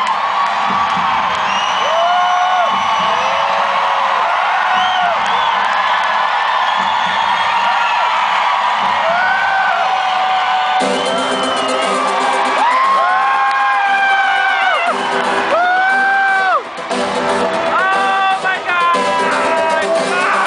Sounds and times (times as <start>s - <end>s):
Music: 0.0s - 3.7s, 10.5s - 20.4s.